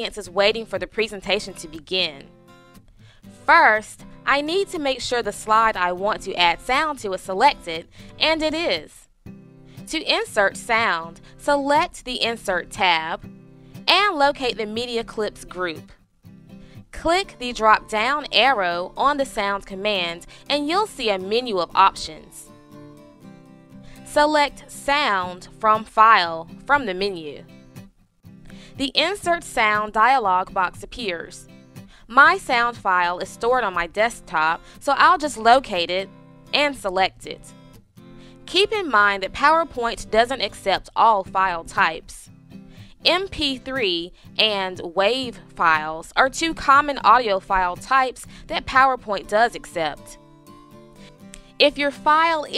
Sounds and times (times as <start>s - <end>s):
Speech: 0.0s - 2.2s, 3.5s - 9.0s, 9.9s - 13.2s, 13.9s - 15.8s, 17.0s - 22.4s, 24.1s - 27.4s, 28.8s - 31.4s, 32.1s - 37.4s, 38.5s - 42.2s, 43.0s - 50.1s, 51.6s - 52.5s
Music: 0.0s - 52.5s.